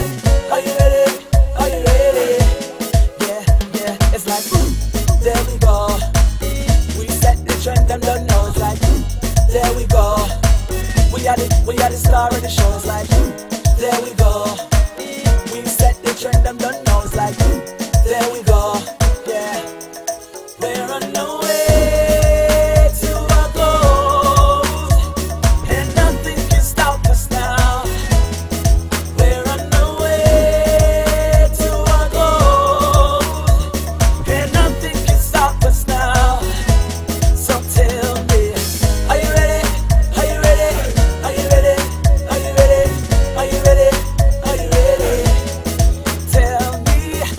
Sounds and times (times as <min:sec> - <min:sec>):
Afrobeat: 0:00.0 - 0:47.3.